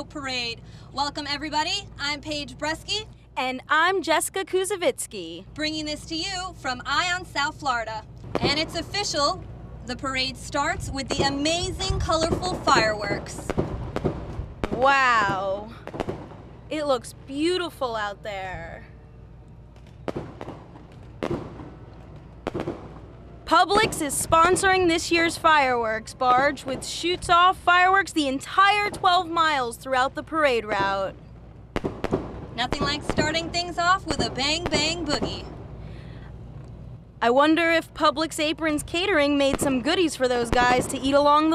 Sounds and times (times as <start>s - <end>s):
Speech: 0.0s - 13.5s, 14.7s - 15.8s, 16.7s - 18.9s, 23.5s - 31.1s, 32.6s - 35.5s, 37.2s - 41.5s.